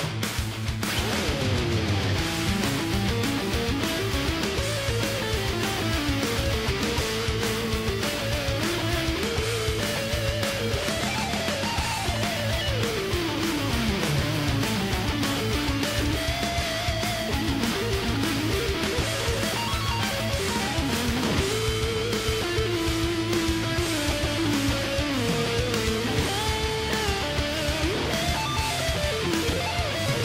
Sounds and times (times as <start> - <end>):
Strum: 0.0 - 30.2.